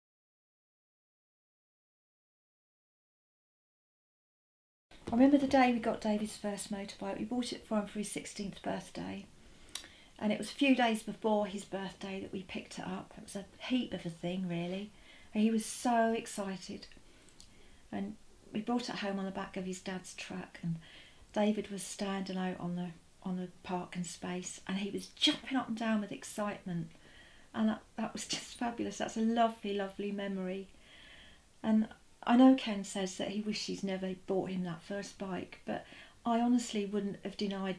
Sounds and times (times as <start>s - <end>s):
Speech: 5.0s - 9.3s, 10.2s - 17.0s, 17.9s - 26.9s, 27.6s - 30.7s, 31.6s - 37.7s.